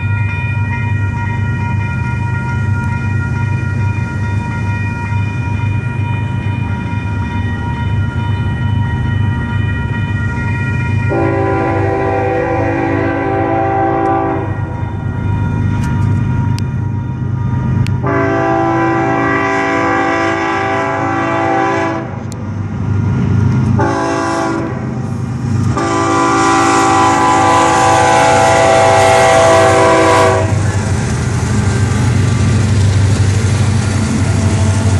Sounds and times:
Railroad car, train wagon: 0.0 - 34.9
Train horn: 11.1 - 14.8, 18.0 - 22.3, 23.8 - 25.0, 25.7 - 30.8.

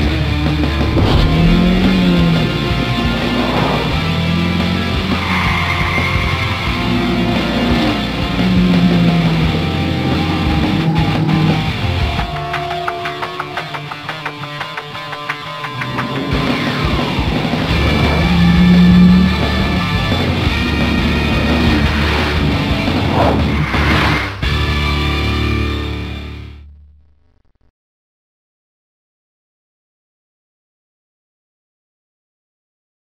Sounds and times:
Car: 0.0 - 26.5
Music: 0.0 - 26.7.

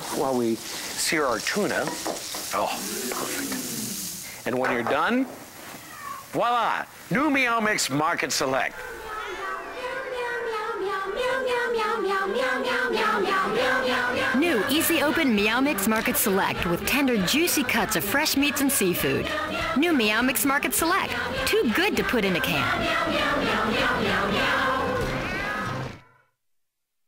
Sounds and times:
Meow: 5.6 - 6.4, 8.8 - 9.9, 25.0 - 26.2
Music: 9.6 - 26.2
Speech: 14.4 - 22.7.

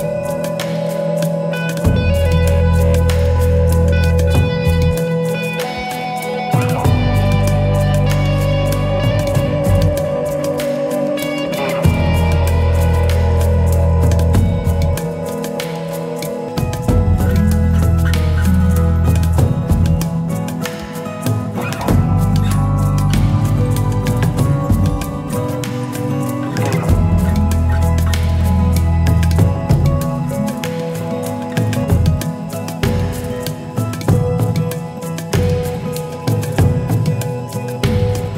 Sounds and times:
Music: 0.0 - 38.3.

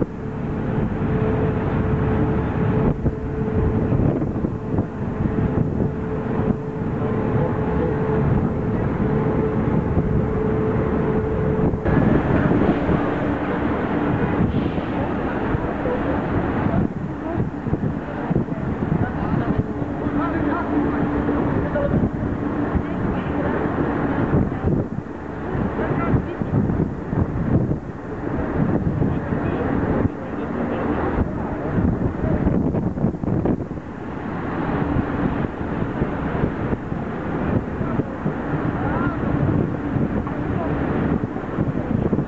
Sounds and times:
Vehicle: 0.0 - 42.2
Speech: 12.0 - 24.9, 25.6 - 26.9, 29.0 - 32.6, 37.3 - 42.2.

